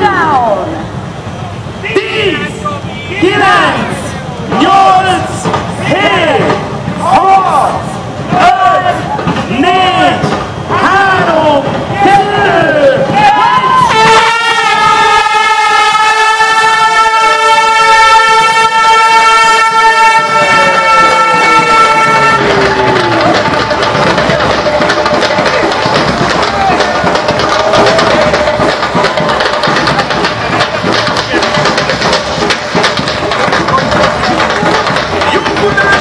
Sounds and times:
Crowd: 0:00.0 - 0:36.0
Outside, urban or manmade: 0:00.0 - 0:36.0
Speech: 0:01.8 - 0:13.6, 0:33.4 - 0:36.0.

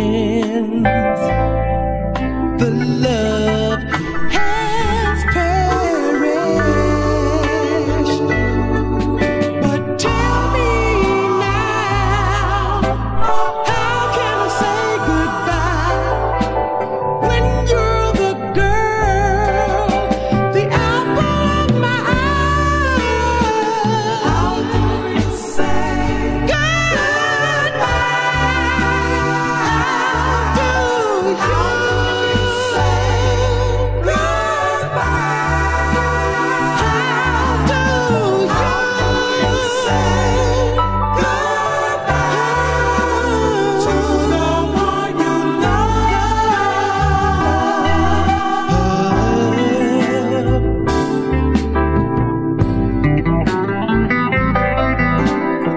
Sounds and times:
Soul music: 0:00.0 - 0:55.7
Singing: 0:09.6 - 0:16.2, 0:20.6 - 0:50.8.

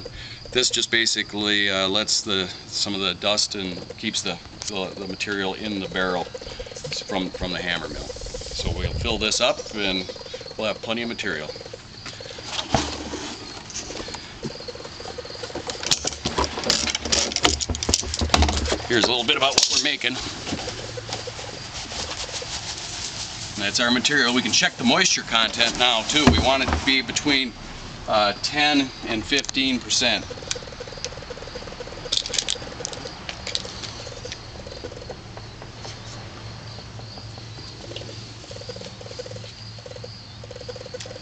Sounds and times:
Speech: 0:18.9 - 0:20.2, 0:23.6 - 0:27.5, 0:28.1 - 0:30.3.

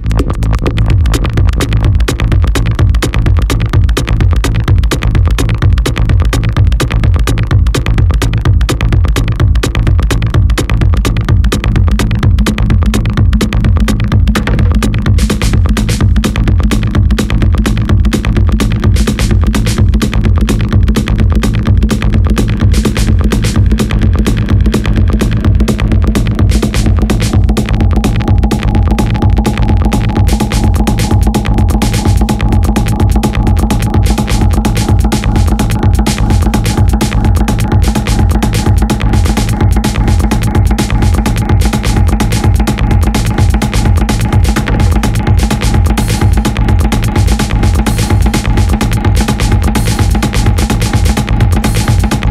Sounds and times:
Music: 0:00.0 - 0:52.3.

